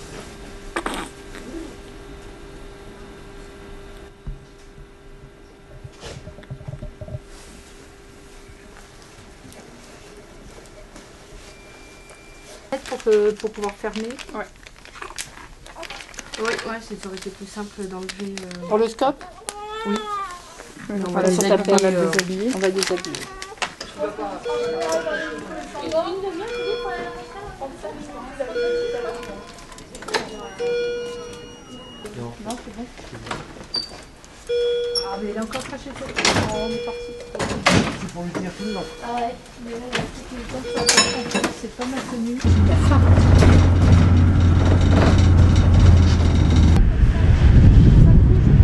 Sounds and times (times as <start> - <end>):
Vehicle: 42.4 - 48.6.